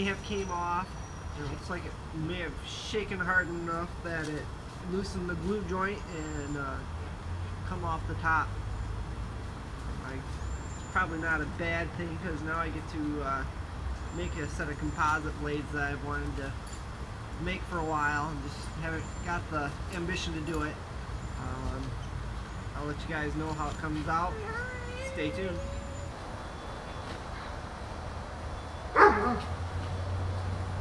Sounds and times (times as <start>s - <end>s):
Speech: 0.0s - 6.9s, 7.7s - 8.5s, 10.0s - 10.3s, 11.0s - 13.5s, 14.1s - 16.6s, 17.4s - 20.8s, 21.4s - 22.0s, 22.8s - 26.0s
Rustling leaves: 0.0s - 30.8s.